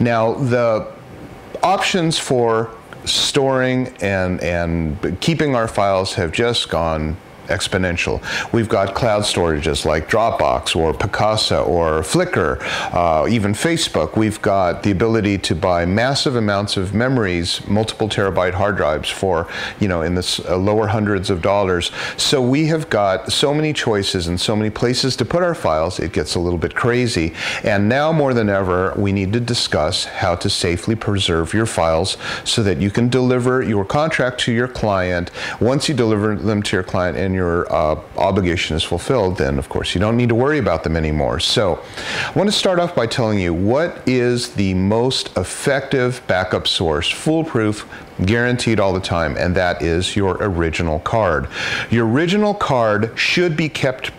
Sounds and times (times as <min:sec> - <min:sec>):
Speech: 0:00.0 - 0:54.1.